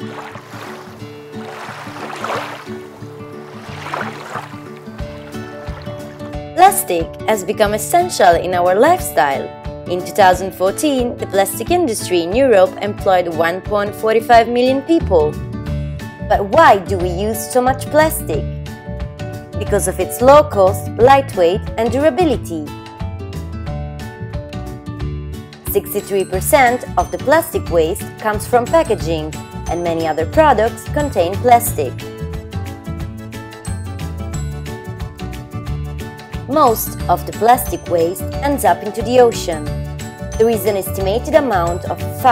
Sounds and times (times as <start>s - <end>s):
Music: 0.0s - 42.3s
Speech: 6.6s - 15.4s, 16.3s - 18.4s, 19.6s - 22.7s, 25.7s - 32.0s, 36.5s - 39.7s, 40.4s - 42.3s.